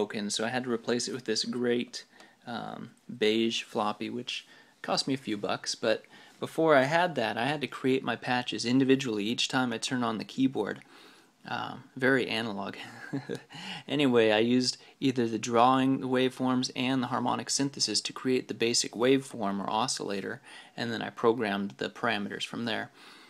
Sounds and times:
Speech: 0.0s - 10.9s, 11.5s - 12.8s, 13.8s - 23.0s.

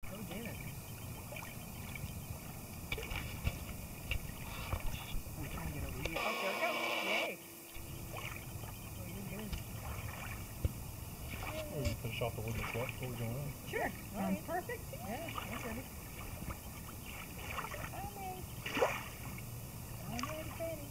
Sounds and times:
Slosh: 9.8s - 10.5s, 11.2s - 11.7s, 12.5s - 13.2s, 15.2s - 18.0s, 18.6s - 19.4s.

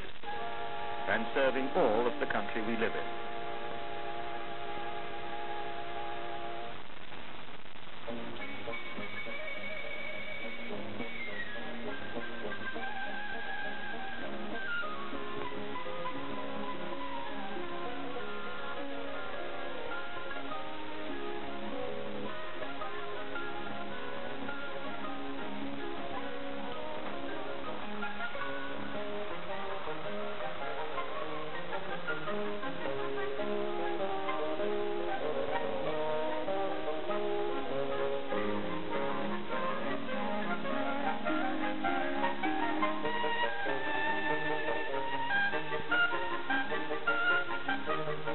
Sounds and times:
Music: 0.0s - 48.3s.

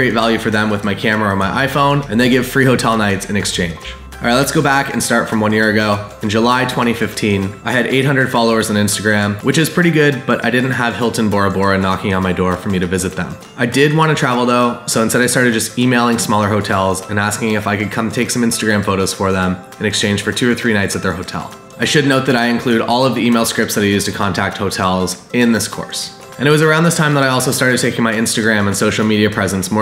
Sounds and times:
Music: 0.0s - 29.8s
Speech: 0.0s - 29.8s.

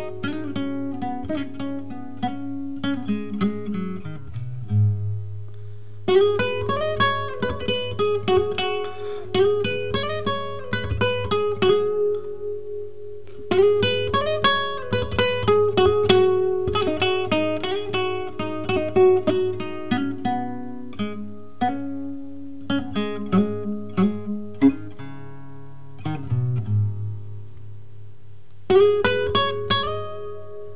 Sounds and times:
Acoustic guitar: 0.0s - 30.7s.

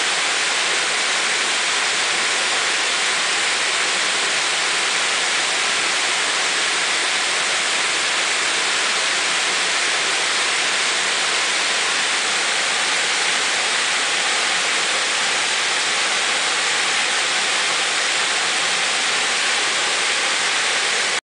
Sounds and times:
Waterfall: 0.0s - 21.2s.

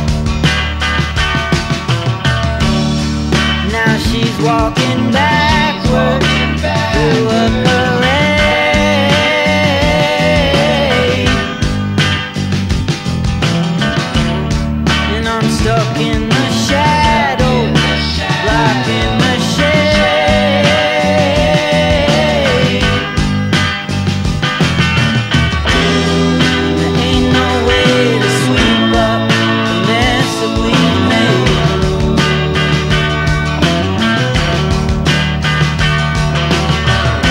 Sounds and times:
Psychedelic rock: 0.0s - 37.3s.

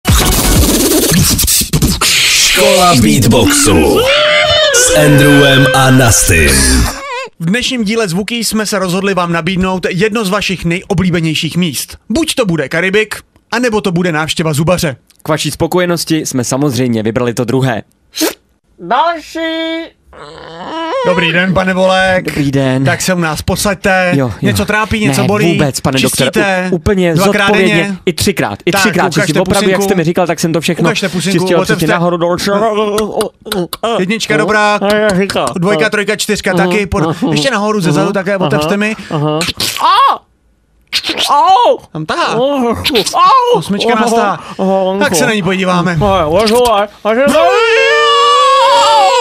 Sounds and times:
Beatboxing: 0.0s - 3.9s, 34.8s - 35.7s, 39.2s - 39.9s, 40.9s - 41.4s
Speech: 2.4s - 4.1s, 4.8s - 17.9s, 21.0s - 40.2s, 41.3s - 47.9s.

